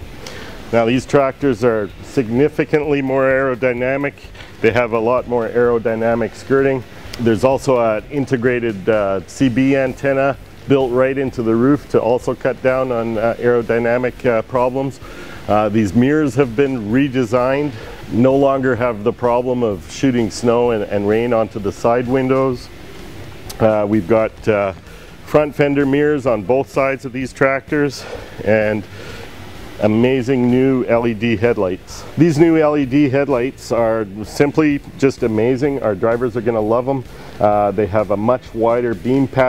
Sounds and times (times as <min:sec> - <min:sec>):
Music: 0:00.0 - 0:39.4
Speech: 0:00.7 - 0:22.7, 0:23.5 - 0:28.9, 0:29.8 - 0:39.4.